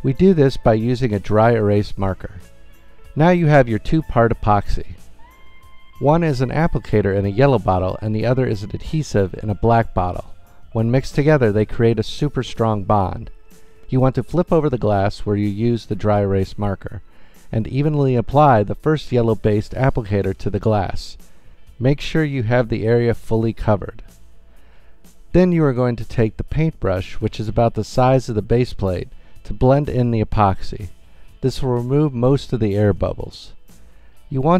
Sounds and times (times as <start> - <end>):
Speech: 0.0 - 2.4, 3.2 - 5.0, 6.0 - 13.3, 13.9 - 21.2, 21.8 - 24.0, 25.3 - 33.6, 34.3 - 34.5
Music: 0.0 - 34.5.